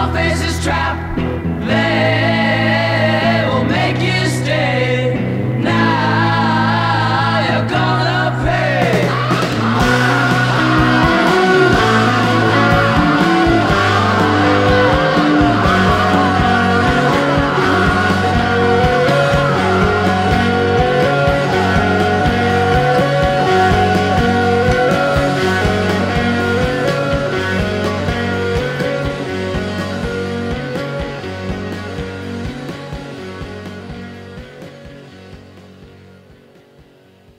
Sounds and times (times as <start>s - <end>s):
Music: 0.0s - 37.3s.